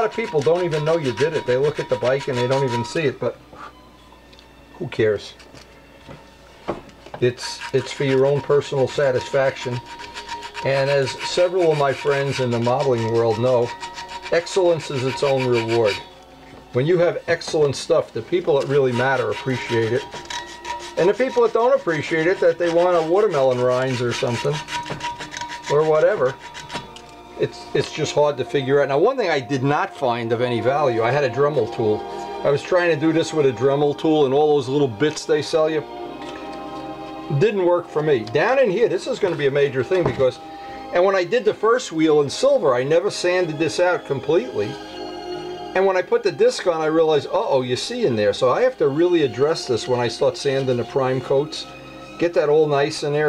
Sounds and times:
Rub: 0.0s - 3.0s, 7.3s - 16.1s, 18.4s - 26.9s.

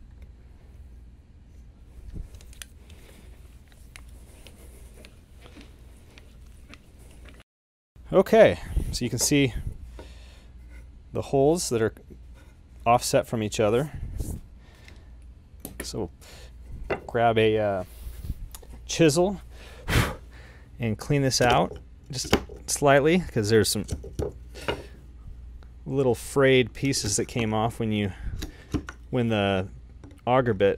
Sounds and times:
Speech: 8.1s - 9.6s, 11.2s - 12.0s, 12.8s - 14.0s, 15.8s - 16.1s, 17.1s - 17.9s, 18.9s - 19.4s, 20.8s - 24.0s, 25.9s - 28.2s, 29.1s - 30.7s.

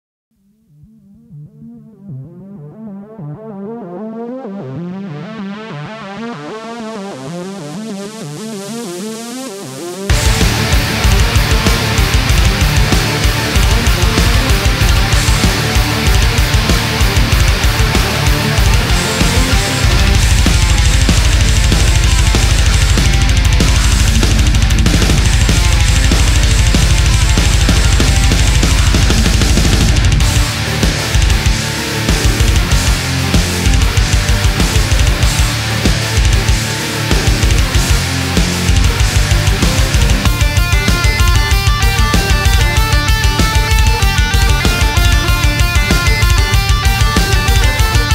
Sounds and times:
Music: 0.3s - 48.1s.

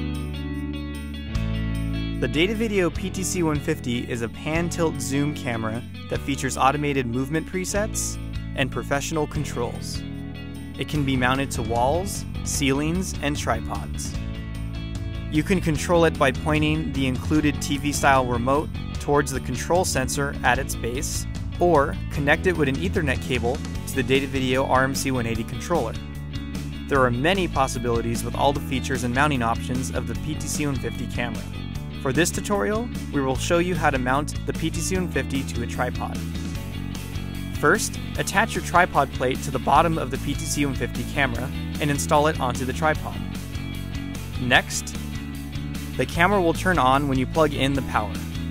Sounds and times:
Music: 0.0s - 48.5s
Speech: 2.2s - 10.0s, 10.8s - 14.2s, 15.3s - 26.0s, 26.9s - 36.2s, 37.6s - 43.2s, 44.4s - 45.0s, 46.0s - 48.2s.

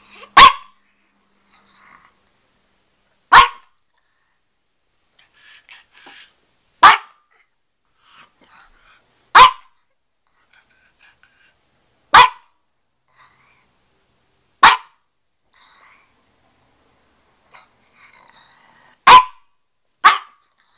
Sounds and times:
Bark: 0.3s - 0.8s, 3.3s - 3.8s, 6.8s - 7.3s, 9.4s - 9.8s, 12.1s - 12.6s, 14.6s - 15.0s, 19.0s - 20.4s.

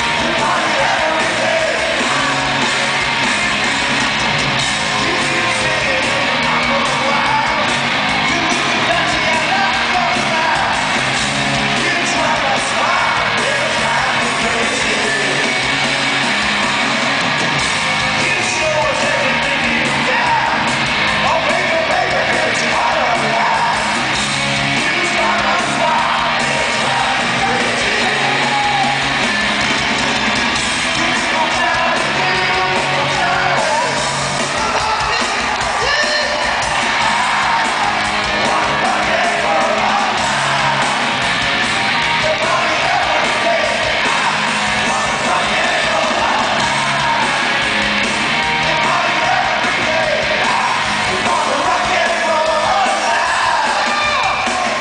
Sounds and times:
Rock and roll: 0.0s - 54.8s.

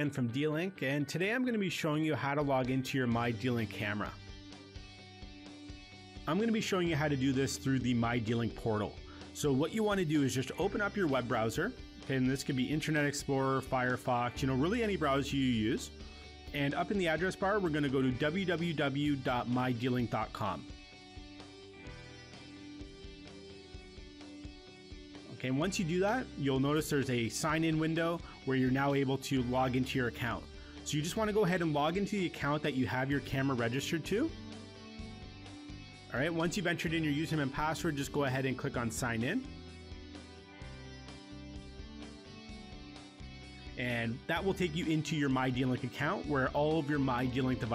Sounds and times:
Speech: 0.0s - 4.2s, 6.3s - 20.7s, 25.3s - 34.4s, 36.1s - 39.5s, 43.8s - 47.7s
Music: 0.0s - 47.7s.

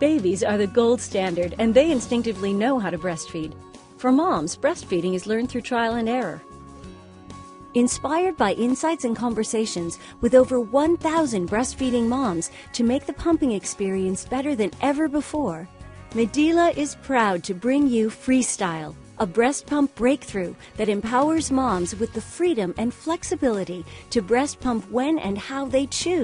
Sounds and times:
Speech: 0.0s - 6.4s, 7.8s - 26.2s
Music: 0.0s - 26.2s.

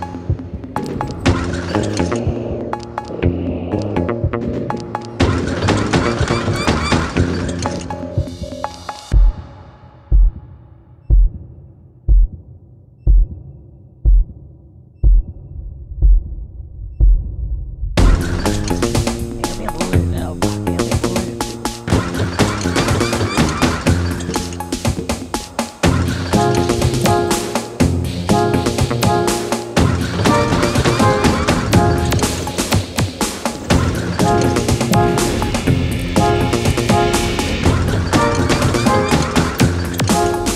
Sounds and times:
Music: 0.0s - 15.4s, 18.0s - 40.5s.

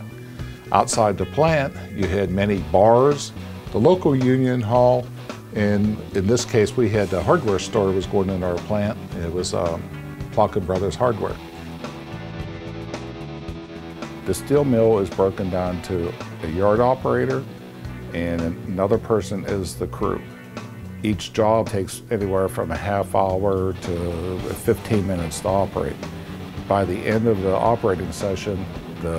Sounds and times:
Music: 0.0s - 29.1s
Speech: 0.7s - 9.8s, 10.4s - 11.4s, 14.3s - 17.5s, 18.1s - 20.3s, 21.0s - 26.0s, 26.7s - 29.1s.

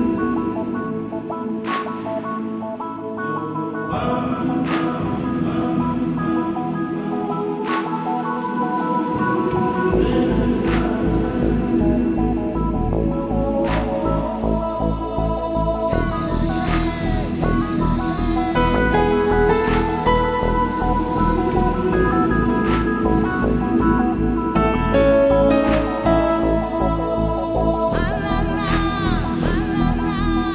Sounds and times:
Background music: 0.0s - 30.5s
New-age music: 0.0s - 30.5s.

